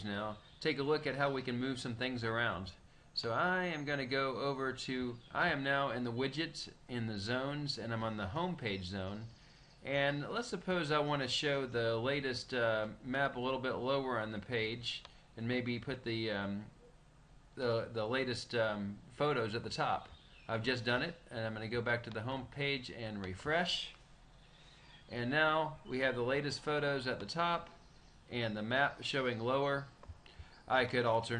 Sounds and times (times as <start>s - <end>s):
Speech: 0.0s - 16.8s, 17.6s - 24.0s, 25.1s - 30.0s, 30.7s - 31.3s.